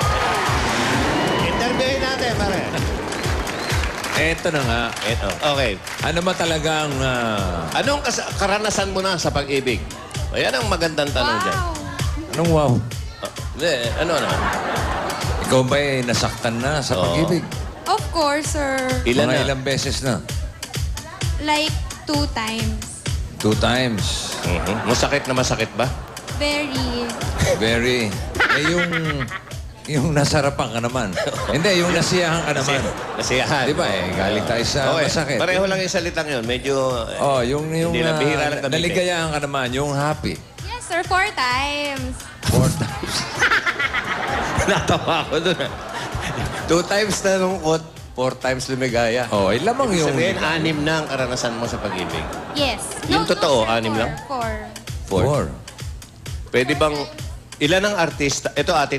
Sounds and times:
Music: 0.0s - 58.9s.

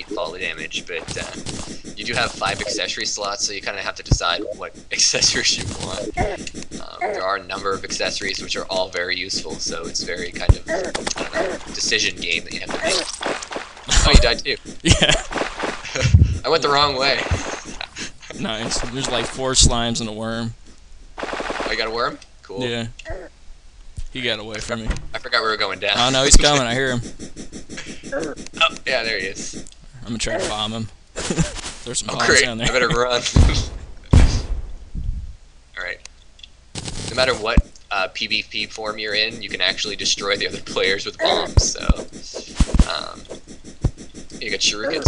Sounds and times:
Speech: 0.0s - 1.4s, 2.0s - 13.1s, 13.9s - 15.2s, 15.9s - 20.6s, 21.7s - 22.9s, 24.1s - 27.0s, 28.6s - 30.9s, 31.9s - 34.5s, 35.8s - 36.0s, 37.1s - 43.2s, 44.4s - 45.0s.

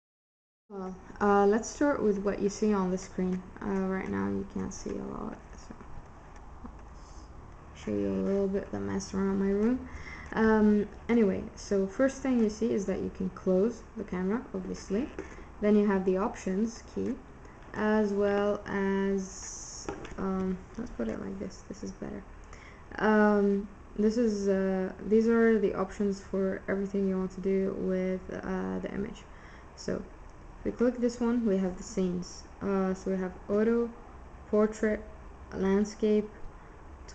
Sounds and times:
Speech: 0.7s - 5.8s, 7.8s - 22.3s, 22.9s - 36.4s.

